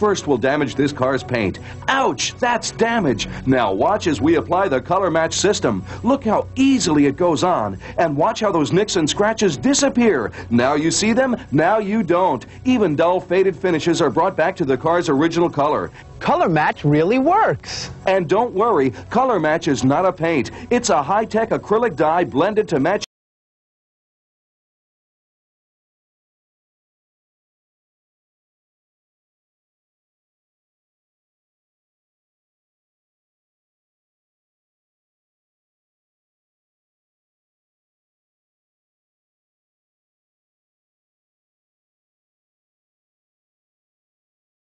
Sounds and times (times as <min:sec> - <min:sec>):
Speech: 0:00.0 - 0:23.1.